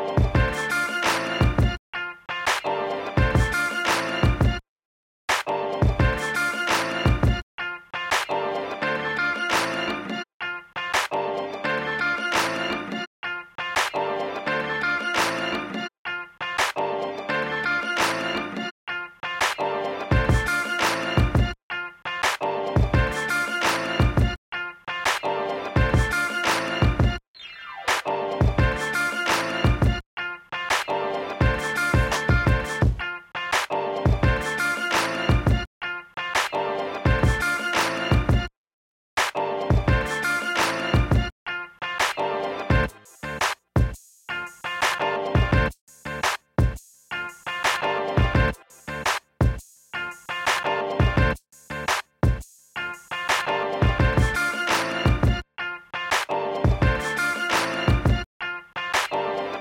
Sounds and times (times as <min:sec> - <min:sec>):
Music: 0:00.0 - 0:04.6, 0:05.3 - 0:38.5, 0:39.2 - 0:59.6.